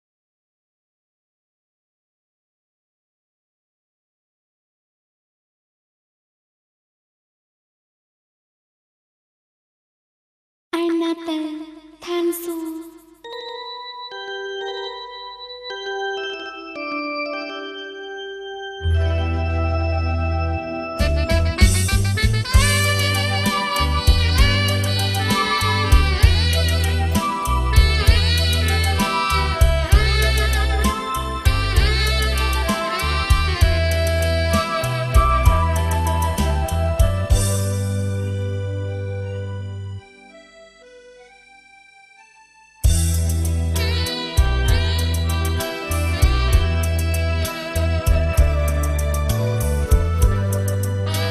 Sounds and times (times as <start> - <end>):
Soundtrack music: 13.2 - 40.6.